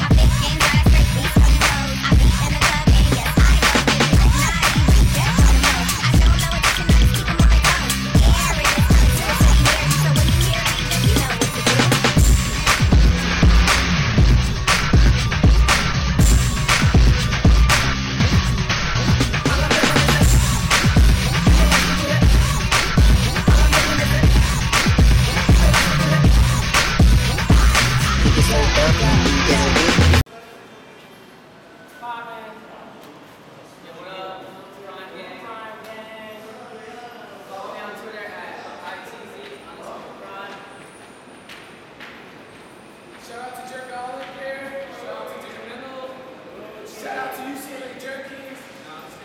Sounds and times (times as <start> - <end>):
Hip hop music: 0.0 - 30.2.